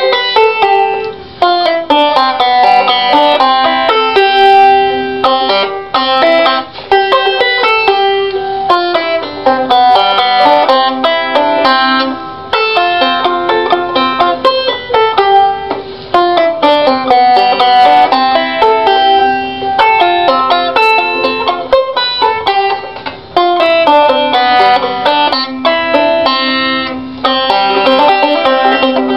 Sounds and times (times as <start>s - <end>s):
Banjo: 0.0s - 29.1s.